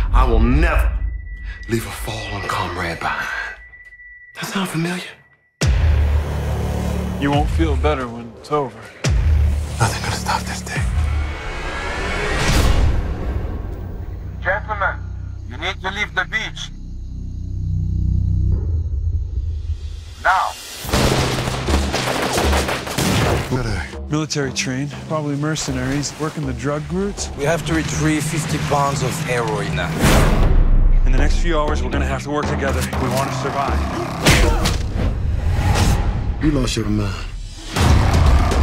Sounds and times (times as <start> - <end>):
Fusillade: 20.9 - 23.4.